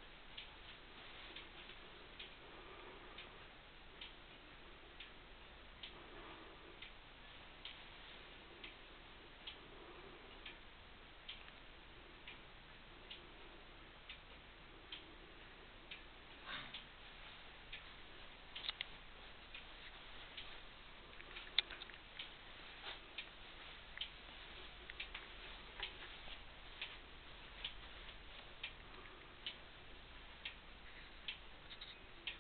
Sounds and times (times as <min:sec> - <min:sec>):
Clock: 0:00.0 - 0:32.4.